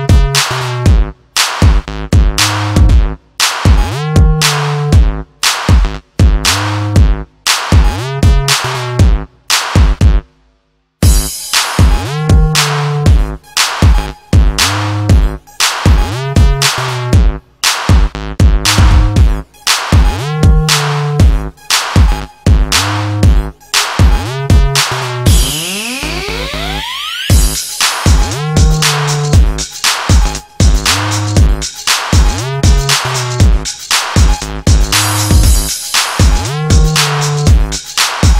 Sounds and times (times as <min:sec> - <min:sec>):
Music: 0:00.0 - 0:38.4.